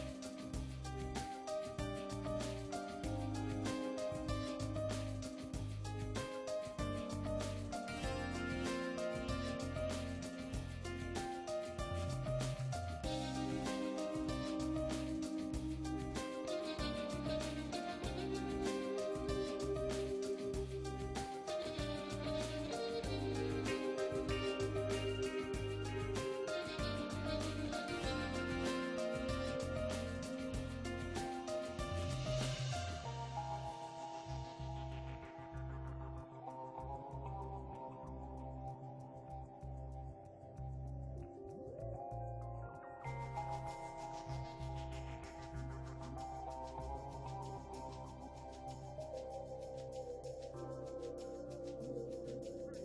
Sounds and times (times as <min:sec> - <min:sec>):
Music: 0:00.0 - 0:52.8.